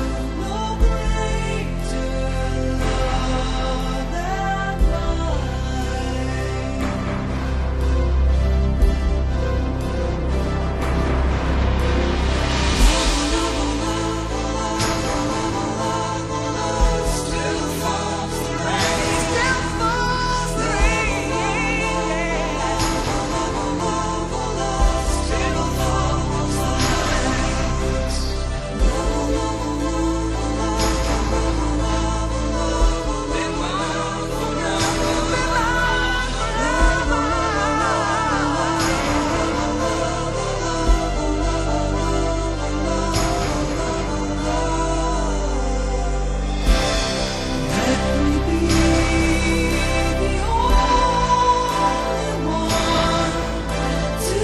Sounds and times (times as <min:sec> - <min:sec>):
Music: 0:00.0 - 0:54.4.